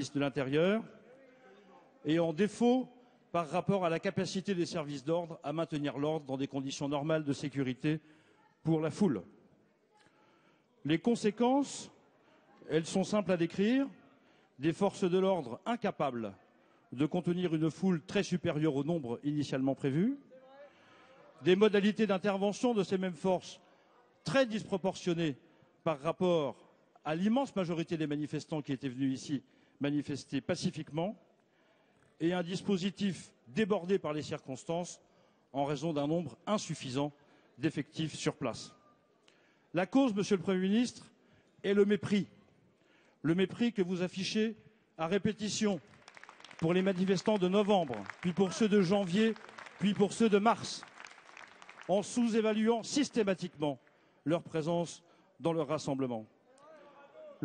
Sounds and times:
Speech: 0.0s - 8.0s, 8.6s - 9.3s, 10.8s - 14.0s, 14.6s - 23.6s, 24.2s - 31.2s, 32.2s - 38.8s, 39.8s - 42.4s, 43.2s - 45.8s, 46.6s - 50.8s, 51.9s - 57.4s.

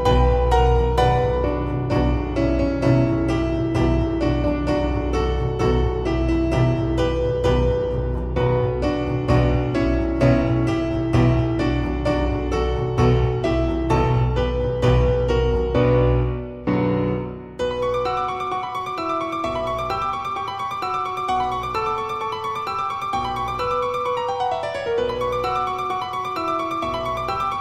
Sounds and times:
Harpsichord: 0.0s - 27.6s.

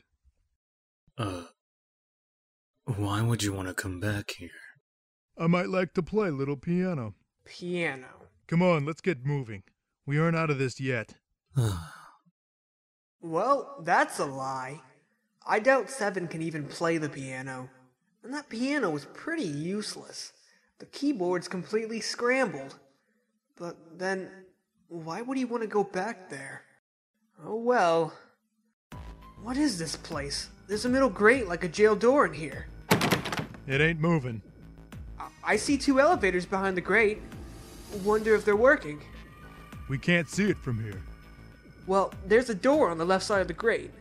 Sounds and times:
Speech: 1.2s - 1.5s, 2.9s - 4.8s, 5.4s - 12.0s, 13.3s - 14.8s, 15.5s - 17.7s, 18.3s - 22.8s, 25.0s - 26.7s, 27.4s - 28.2s, 29.4s - 32.7s, 33.7s - 34.4s, 35.2s - 37.2s, 38.0s - 39.0s, 39.9s - 41.0s, 41.9s - 43.9s.

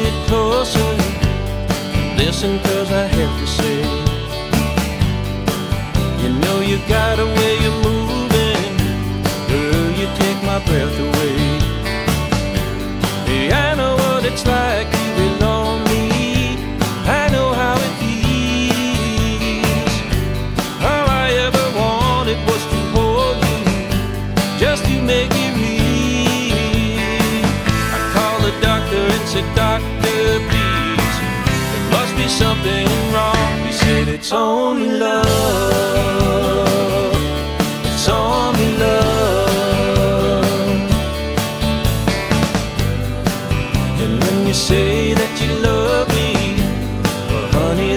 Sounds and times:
Christian music: 0.0s - 47.9s.

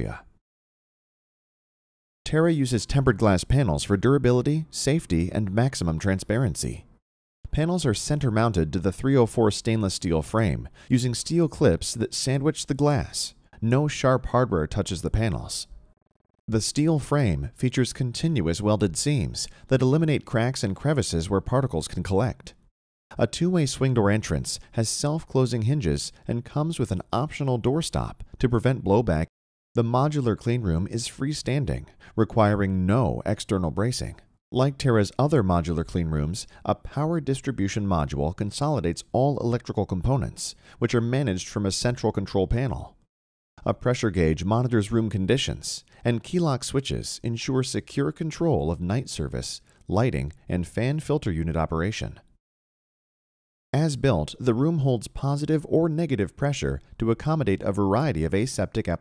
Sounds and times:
Speech: 0.0s - 0.4s, 2.3s - 6.9s, 7.5s - 15.8s, 16.5s - 43.0s, 43.6s - 52.3s, 53.8s - 59.0s.

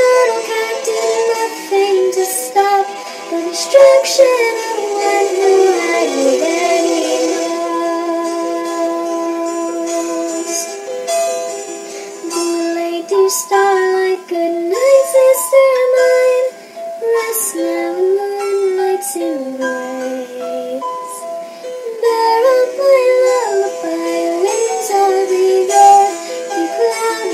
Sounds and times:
Lullaby: 0.0s - 27.3s.

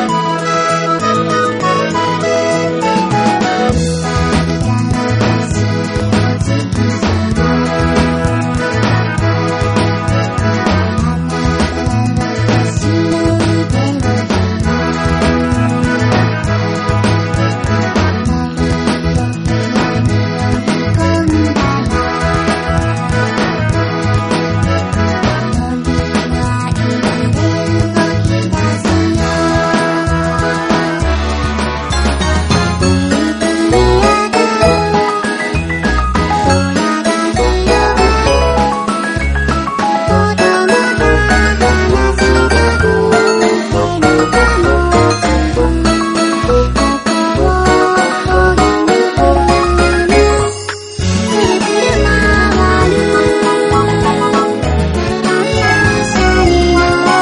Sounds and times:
Music: 0.0s - 57.2s.

